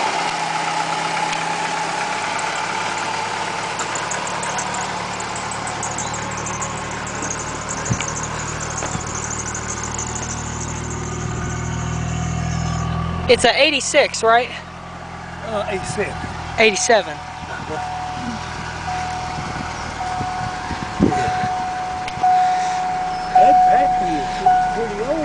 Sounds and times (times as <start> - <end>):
Car: 0.0 - 25.2.